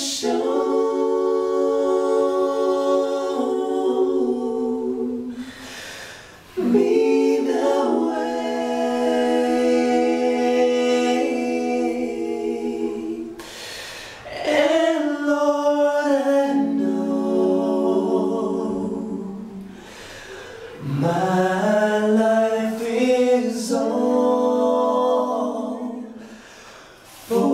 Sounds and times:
Choir: 0:00.0 - 0:27.5.

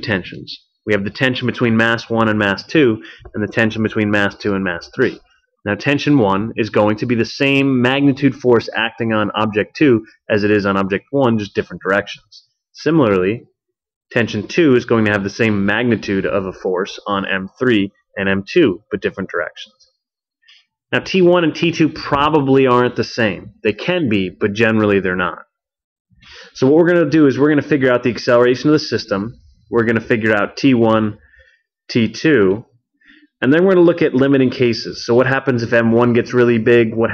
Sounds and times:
Narration, monologue: 0:00.0 - 0:37.1.

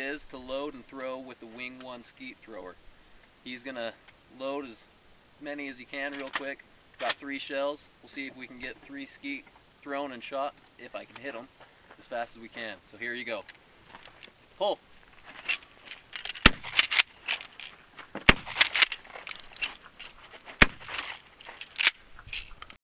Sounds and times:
Speech: 0:00.0 - 0:02.8, 0:03.5 - 0:13.5, 0:14.6 - 0:14.8.

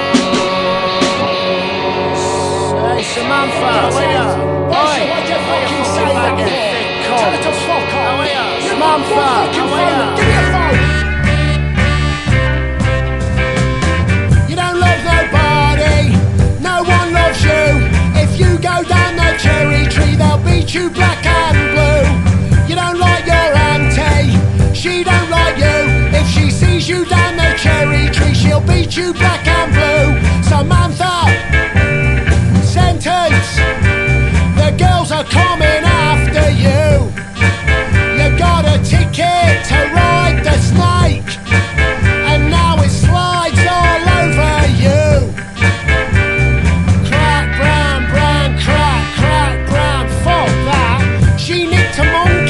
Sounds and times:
Ska: 0:00.0 - 0:52.5.

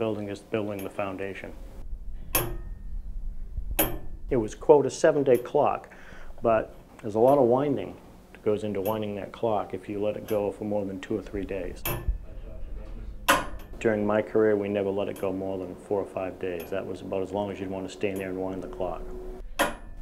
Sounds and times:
Speech: 0:00.0 - 0:01.6, 0:04.3 - 0:13.2, 0:13.8 - 0:19.1.

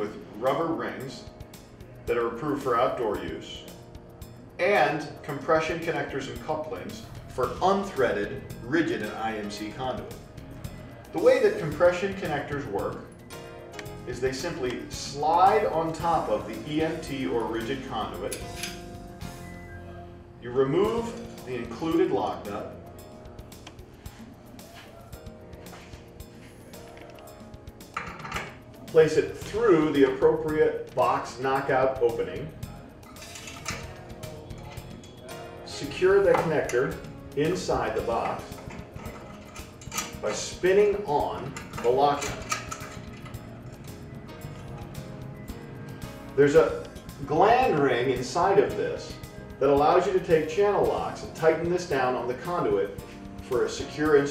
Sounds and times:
Speech: 0:00.0 - 0:01.3, 0:02.1 - 0:03.7, 0:04.6 - 0:10.2, 0:11.2 - 0:13.0, 0:14.1 - 0:18.4, 0:20.4 - 0:22.8, 0:28.9 - 0:32.5, 0:35.7 - 0:38.6, 0:40.2 - 0:42.4, 0:46.4 - 0:54.3
Music: 0:00.0 - 0:54.3.

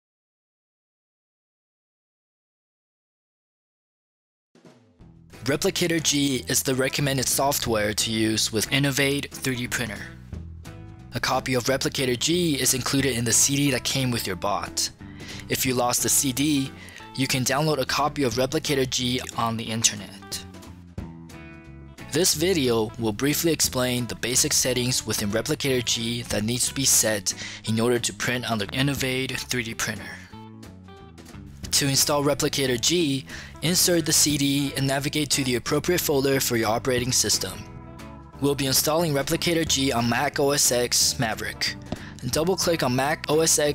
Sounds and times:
Music: 0:04.6 - 0:43.7
Speech: 0:05.4 - 0:10.2, 0:11.2 - 0:20.5, 0:22.1 - 0:30.4, 0:31.7 - 0:37.7, 0:38.4 - 0:43.7.

